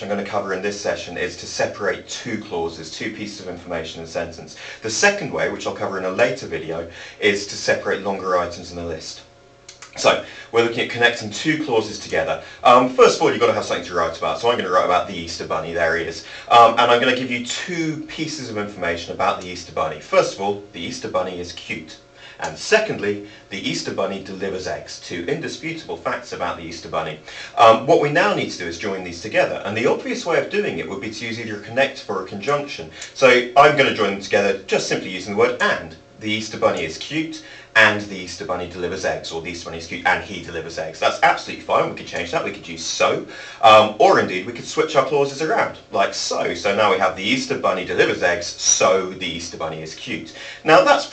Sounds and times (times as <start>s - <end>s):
Speech: 0.0s - 51.1s.